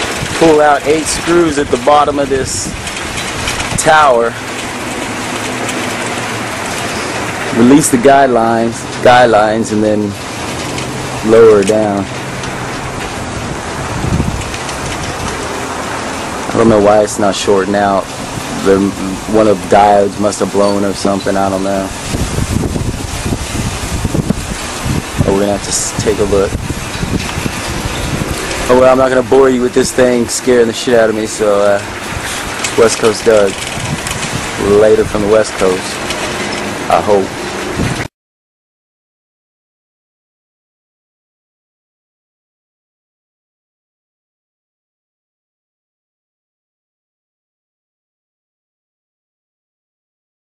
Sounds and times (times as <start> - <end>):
Wind: 0.0 - 38.1
Speech: 0.4 - 2.8, 3.8 - 4.4, 7.5 - 10.2, 11.2 - 12.1, 16.5 - 22.0, 25.2 - 26.6, 28.7 - 31.9, 32.8 - 33.6, 34.6 - 36.0, 36.9 - 37.3.